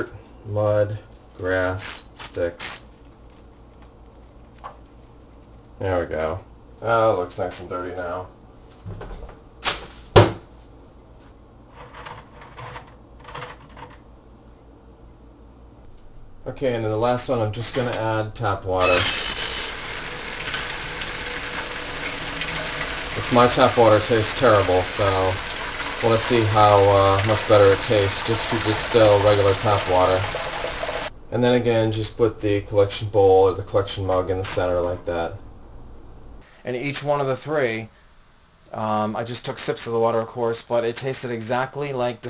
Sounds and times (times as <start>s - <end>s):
Speech: 0.0s - 2.6s, 5.8s - 8.3s, 16.4s - 19.0s, 23.2s - 25.4s, 26.0s - 30.3s, 31.3s - 35.4s, 36.6s - 37.9s, 38.7s - 42.2s
Inside, small room: 0.0s - 42.2s
Water: 19.9s - 31.1s.